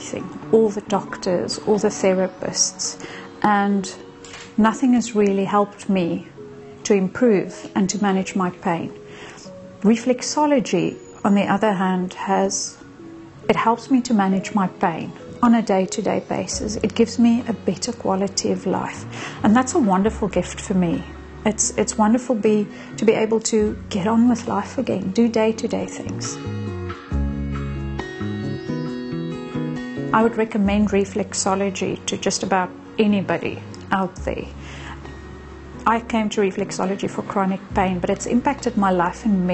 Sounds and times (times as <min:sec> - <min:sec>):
Female speech, woman speaking: 0:00.0 - 0:04.0, 0:04.6 - 0:08.9, 0:09.8 - 0:12.8, 0:13.5 - 0:26.4, 0:30.2 - 0:34.6, 0:35.9 - 0:39.5.